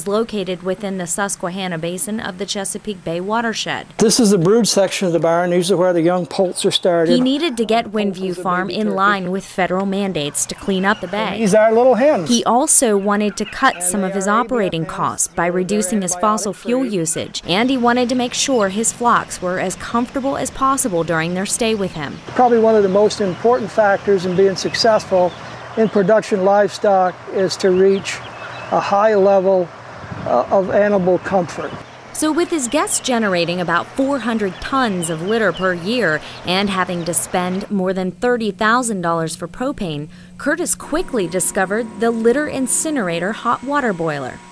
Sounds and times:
Speech: 0:00.0 - 0:28.2, 0:28.8 - 0:29.7, 0:30.3 - 0:44.4
Bird: 0:10.0 - 0:11.6, 0:12.2 - 0:14.4, 0:27.6 - 0:29.0.

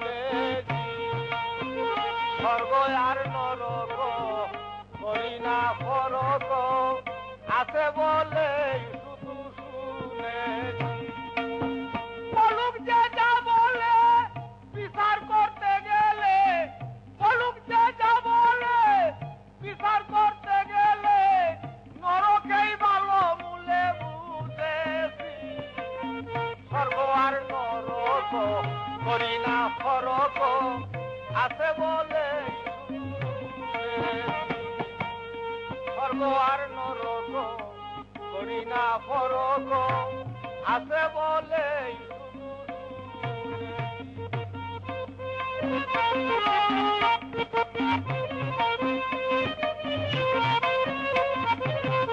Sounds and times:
Male singing: 0:00.0 - 0:52.1
Music: 0:00.0 - 0:52.1.

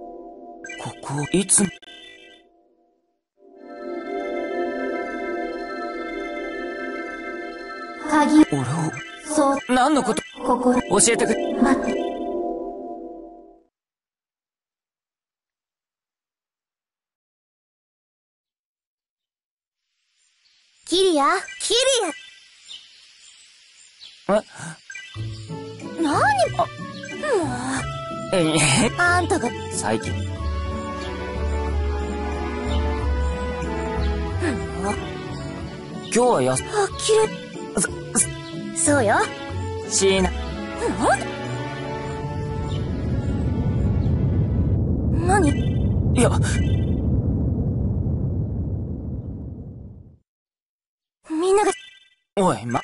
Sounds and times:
Speech: 0:00.8 - 0:01.8, 0:08.0 - 0:11.9, 0:20.9 - 0:22.2, 0:26.0 - 0:30.2, 0:36.1 - 0:39.3, 0:45.2 - 0:45.6, 0:46.2 - 0:46.6, 0:51.3 - 0:51.8, 0:52.4 - 0:52.8
Music: 0:02.7 - 0:09.5, 0:10.4 - 0:13.7, 0:25.1 - 0:44.3.

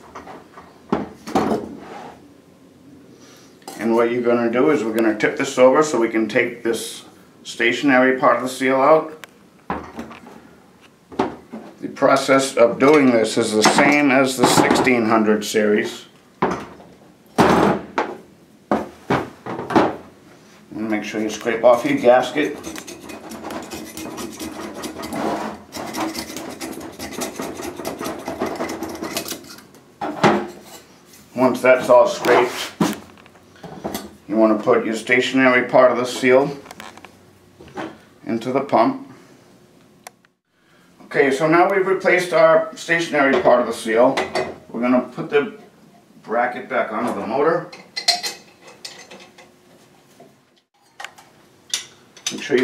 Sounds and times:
Speech: 0:03.8 - 0:09.2, 0:11.8 - 0:16.2, 0:20.7 - 0:22.6, 0:31.4 - 0:32.8, 0:34.3 - 0:36.7, 0:38.2 - 0:39.1, 0:41.0 - 0:47.8, 0:52.3 - 0:52.6.

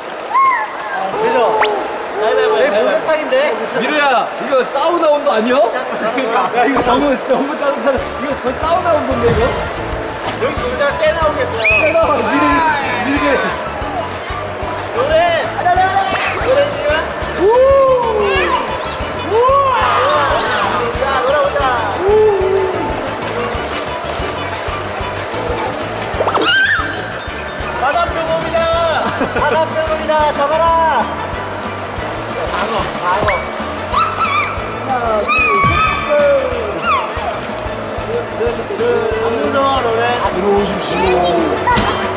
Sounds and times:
Music: 0:06.7 - 0:42.1.

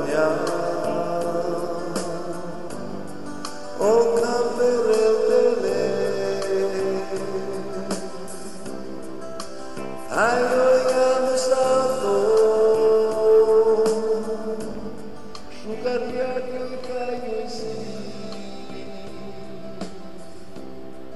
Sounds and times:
Music: 0:00.0 - 0:21.1.

